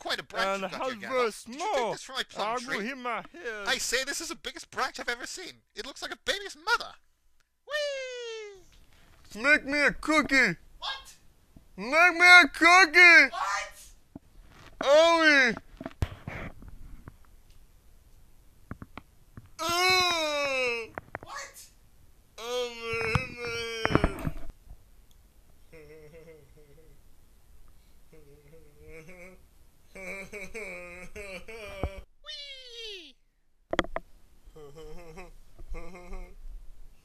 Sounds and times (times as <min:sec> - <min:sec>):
Speech: 0:00.0 - 0:07.0, 0:07.7 - 0:08.7, 0:09.3 - 0:11.2, 0:11.8 - 0:14.0, 0:14.8 - 0:15.6, 0:19.6 - 0:21.7, 0:32.3 - 0:33.2.